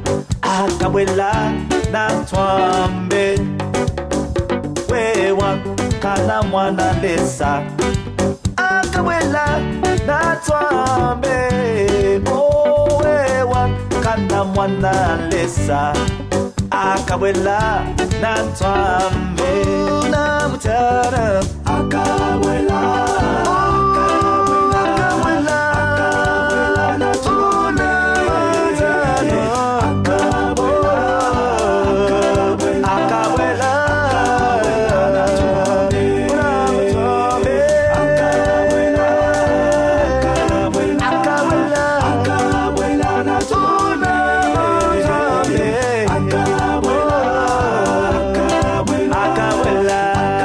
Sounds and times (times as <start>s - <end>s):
Music: 0.0s - 50.4s.